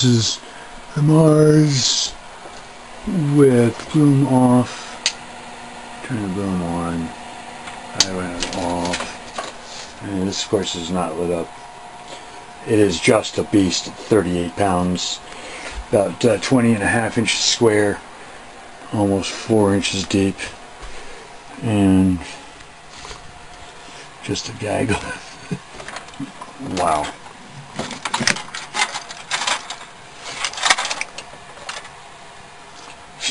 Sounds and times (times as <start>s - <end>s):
Speech: 0.0s - 0.4s, 1.0s - 2.2s, 3.1s - 4.8s, 6.0s - 7.2s, 7.9s - 9.2s, 10.0s - 11.5s, 12.6s - 15.2s, 15.9s - 18.0s, 18.9s - 20.6s, 21.6s - 22.4s, 24.2s - 25.3s, 26.6s - 27.2s.